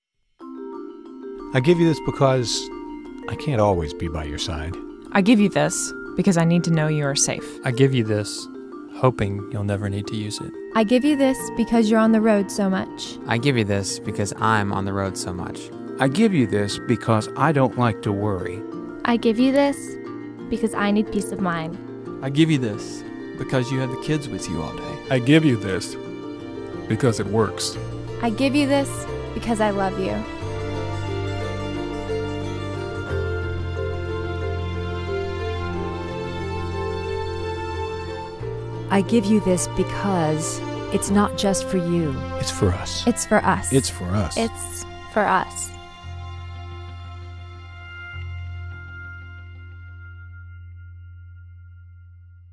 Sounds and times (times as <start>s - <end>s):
Music: 0.2s - 52.5s
Speech: 1.6s - 2.7s, 3.3s - 19.9s, 20.6s - 26.0s, 26.9s - 30.2s, 38.9s - 45.7s.